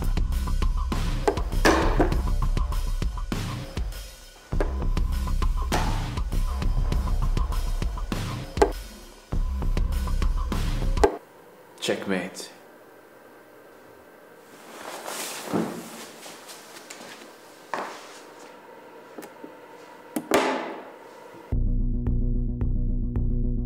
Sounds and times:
Music: 0.0 - 11.2, 21.5 - 23.6
Speech: 11.8 - 12.6.

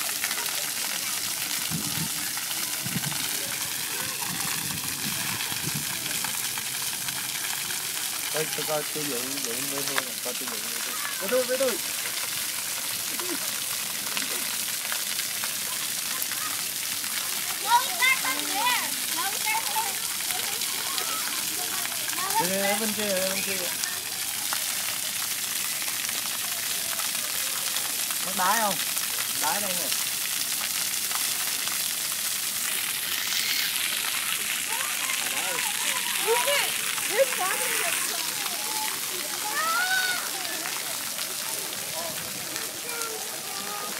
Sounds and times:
Water: 0.0 - 43.9.

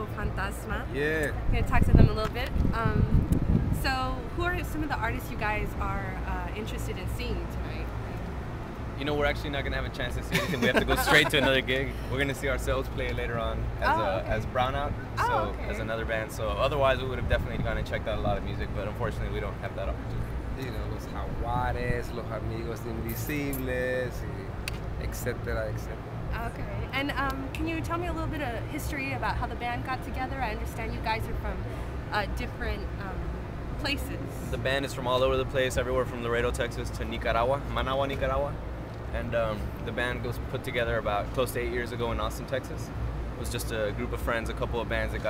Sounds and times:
Speech: 9.1 - 20.0, 20.6 - 24.4.

